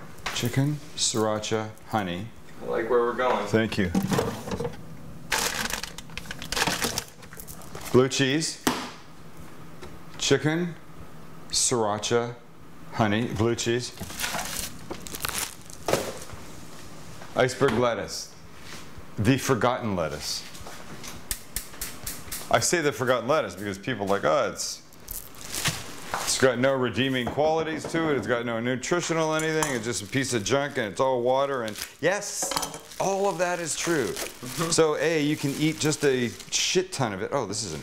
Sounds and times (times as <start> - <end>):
Speech: 0.3 - 4.0, 7.9 - 8.7, 10.2 - 10.8, 11.5 - 14.0, 17.4 - 18.4, 19.2 - 20.5, 22.5 - 24.8, 26.3 - 37.8.